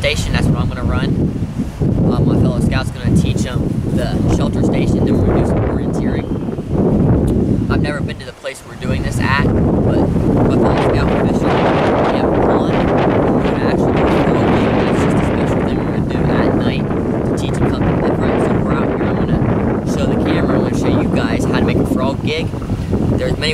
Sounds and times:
Speech: 0:00.0 - 0:01.2, 0:02.1 - 0:06.3, 0:07.7 - 0:22.5, 0:23.2 - 0:23.5.

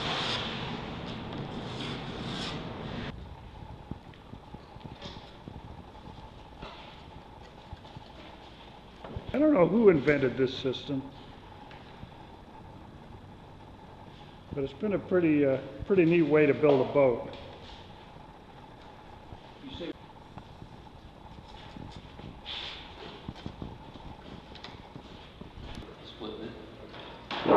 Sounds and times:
Speech: 0:14.6 - 0:17.4.

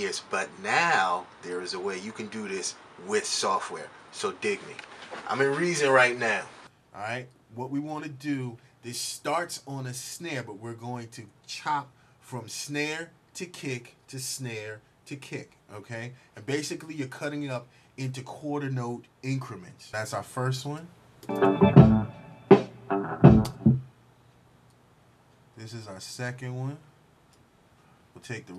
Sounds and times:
Speech: 0:00.0 - 0:21.0, 0:25.6 - 0:27.0, 0:28.2 - 0:28.5
Music: 0:21.3 - 0:23.9.

